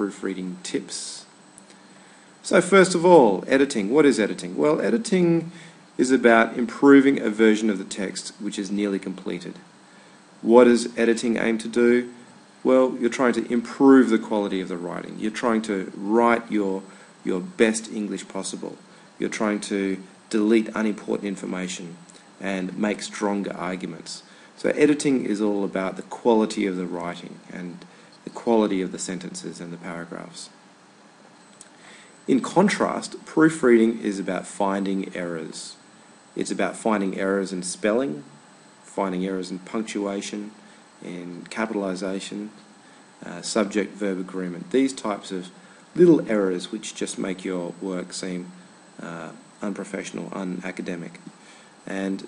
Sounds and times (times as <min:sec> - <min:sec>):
Speech: 0:00.0 - 0:01.3, 0:02.4 - 0:09.7, 0:10.4 - 0:30.6, 0:32.3 - 0:35.8, 0:36.4 - 0:52.2.